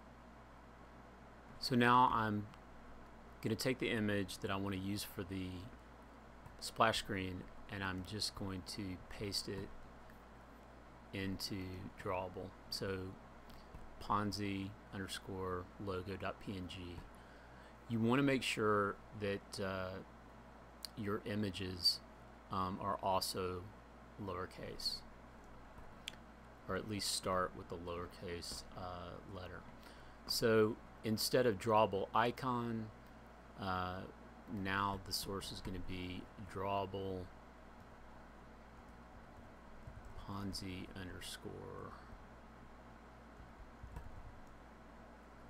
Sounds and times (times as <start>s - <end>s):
Speech: 1.6s - 2.6s, 3.4s - 5.8s, 6.6s - 9.8s, 11.1s - 13.2s, 14.0s - 17.1s, 17.9s - 20.1s, 20.8s - 25.1s, 26.7s - 29.7s, 30.3s - 33.0s, 33.6s - 37.4s, 40.2s - 42.1s.